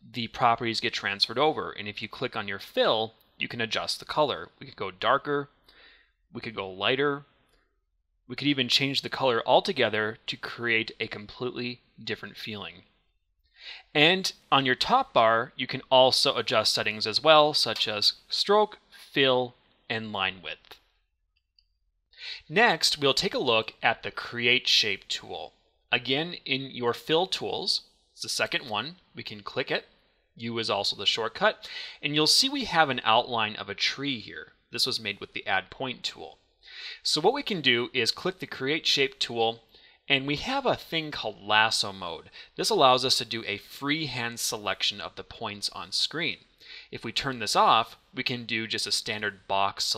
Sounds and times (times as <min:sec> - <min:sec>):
Speech: 0:00.0 - 0:05.6, 0:06.3 - 0:07.3, 0:08.3 - 0:12.9, 0:13.8 - 0:20.8, 0:22.2 - 0:49.9.